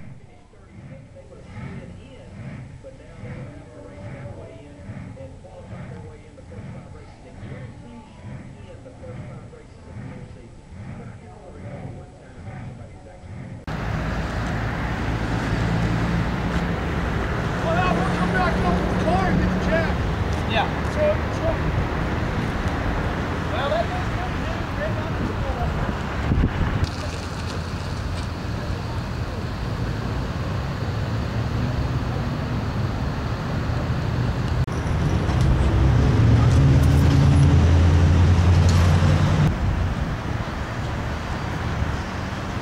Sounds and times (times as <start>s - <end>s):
Speech: 0.0s - 13.6s, 17.6s - 21.8s, 23.5s - 26.0s
Vehicle: 0.0s - 42.6s.